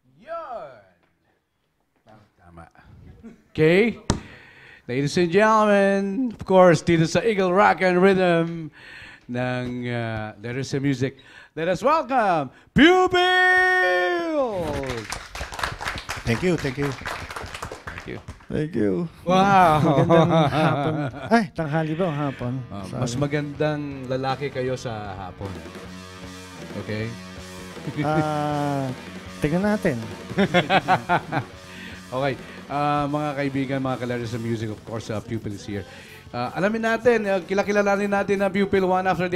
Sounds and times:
Background music: 16.2 - 39.3
Speech: 21.3 - 25.6, 32.2 - 39.3.

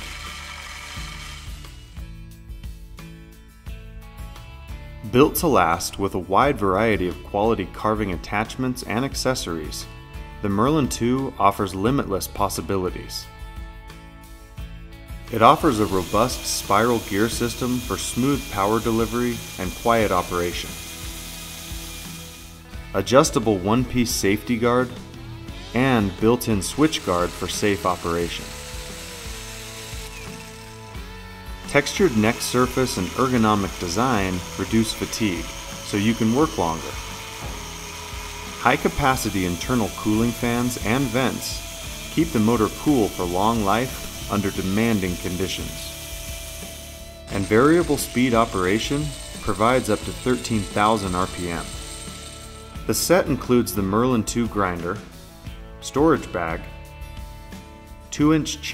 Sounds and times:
Music: 0.0 - 58.7
Speech: 5.1 - 13.3, 15.3 - 20.8, 23.0 - 25.0, 25.7 - 28.5, 31.7 - 37.0, 38.6 - 41.6, 42.2 - 45.9, 47.3 - 51.8, 52.9 - 55.1, 55.8 - 56.7, 58.1 - 58.7.

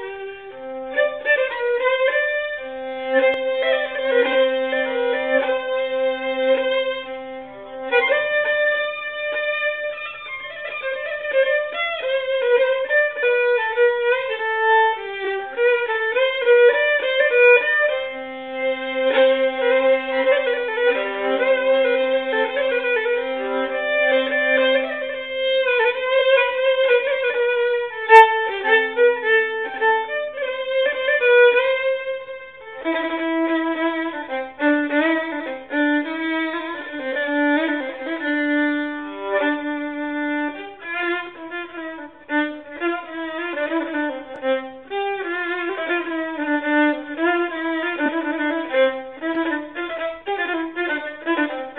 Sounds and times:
Violin, fiddle: 0.0 - 51.7.

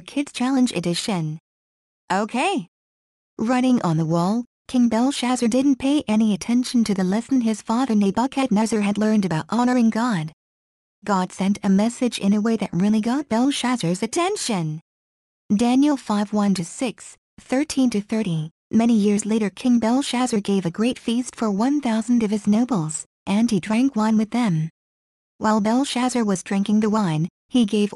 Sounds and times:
Speech: 0.0 - 1.4, 2.1 - 2.7, 3.4 - 10.4, 11.0 - 14.8, 15.5 - 24.7, 25.4 - 27.9.

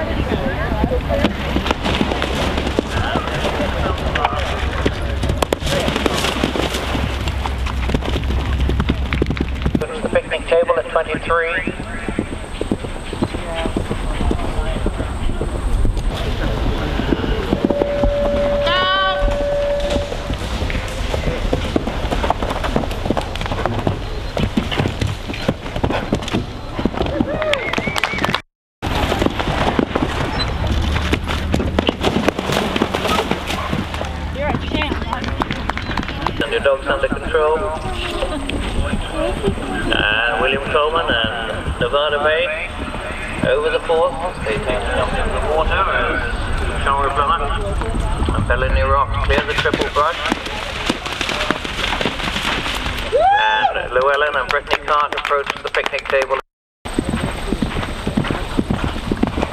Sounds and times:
Clip-clop: 0.0 - 59.5.

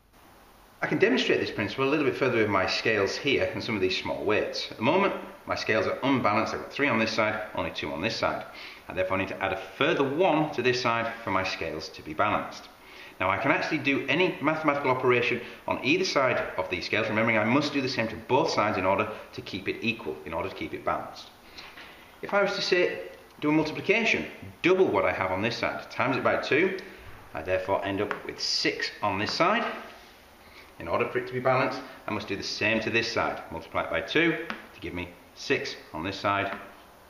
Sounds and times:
Inside, small room: 0.0 - 37.0
Speech: 0.8 - 21.3, 22.2 - 29.9, 30.8 - 36.7.

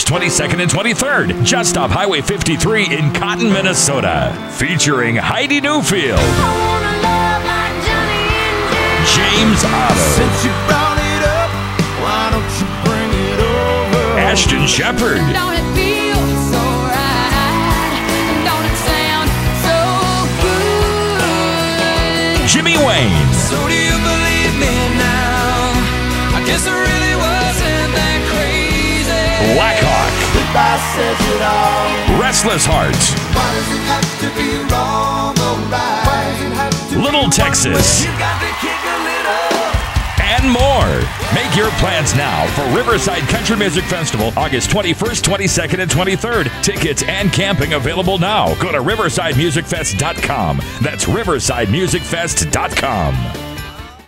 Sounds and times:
Soundtrack music: 0.0 - 54.0
New-age music: 0.1 - 45.2
Rhythm and blues: 5.8 - 54.0.

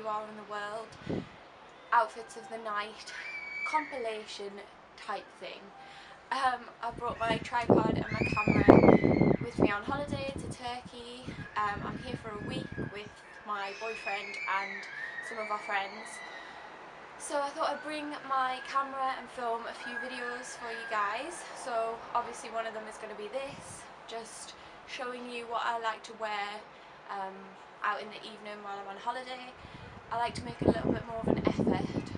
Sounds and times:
Speech: 0.0 - 1.0, 2.0 - 5.7, 6.3 - 16.2, 17.2 - 32.1.

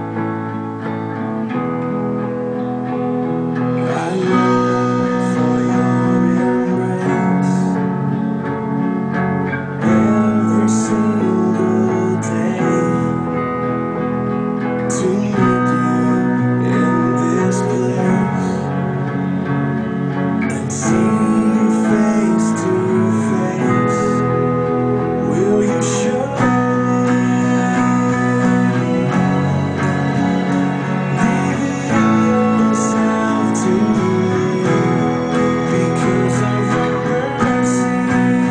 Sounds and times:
Acoustic guitar: 0.0 - 38.5
Electric guitar: 0.0 - 38.5
Strum: 0.0 - 38.5.

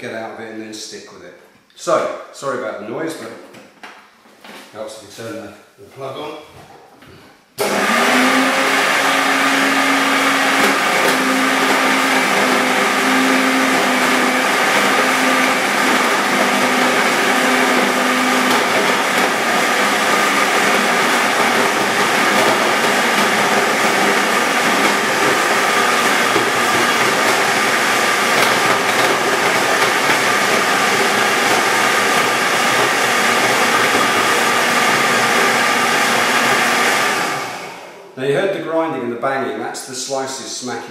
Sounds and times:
Blender: 7.6 - 38.2.

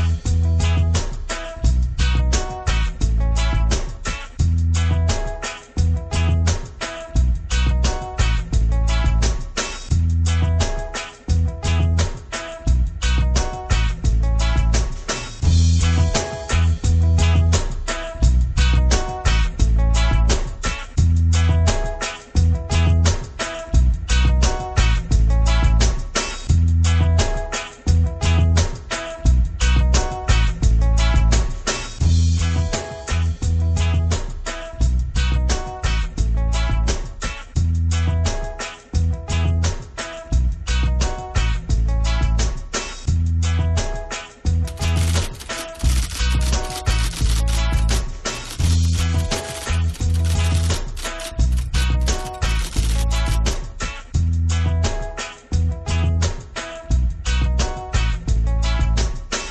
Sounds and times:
Music: 0.0 - 59.5.

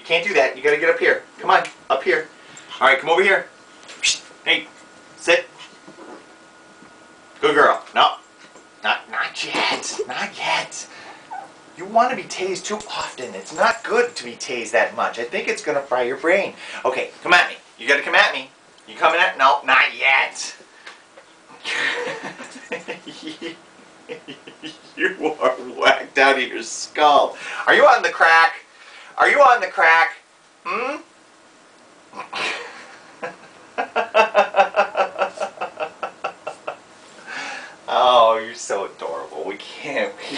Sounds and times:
Speech: 0.0 - 5.5, 7.4 - 8.2, 8.8 - 10.9, 11.8 - 20.6, 25.0 - 31.1, 37.9 - 40.3.

